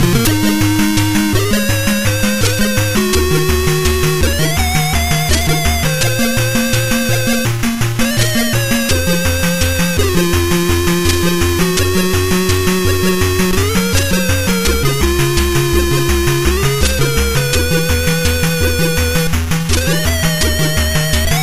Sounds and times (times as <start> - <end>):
Music: 0.0 - 21.4.